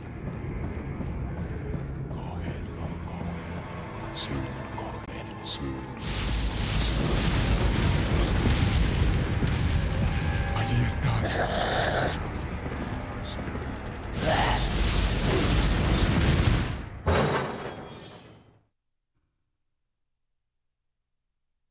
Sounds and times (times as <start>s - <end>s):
Music: 0.0s - 17.1s
Speech: 2.1s - 6.0s, 10.6s - 11.7s.